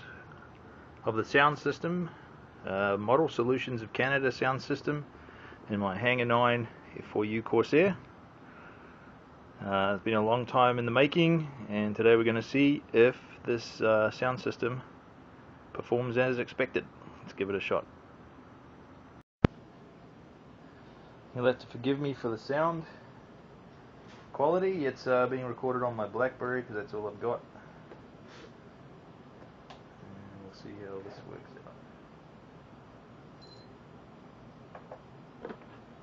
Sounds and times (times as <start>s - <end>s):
Speech: 1.0s - 5.1s, 5.7s - 8.1s, 9.6s - 14.9s, 15.7s - 17.9s, 21.3s - 23.0s, 24.3s - 27.5s, 30.0s - 31.8s.